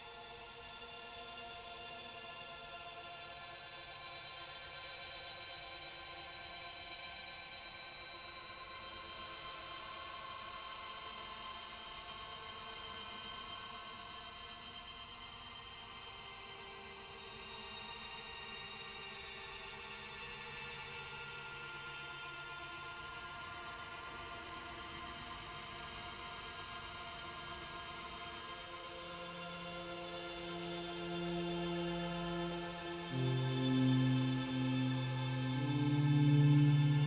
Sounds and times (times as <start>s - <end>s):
Music: 0.0s - 37.0s.